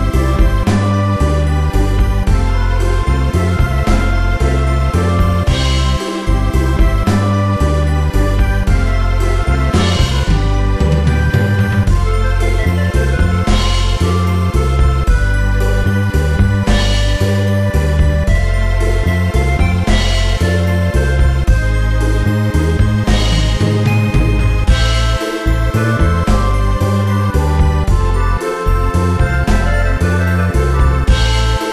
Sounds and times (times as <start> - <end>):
Music: 0.0 - 31.7.